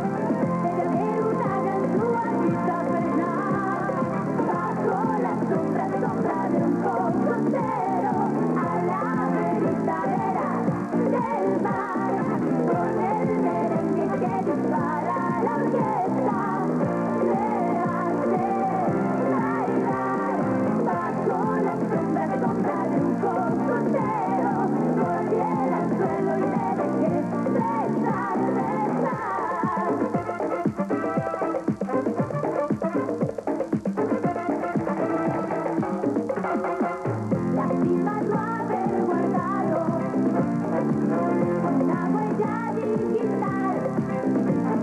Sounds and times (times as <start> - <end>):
Background music: 0.0 - 44.8.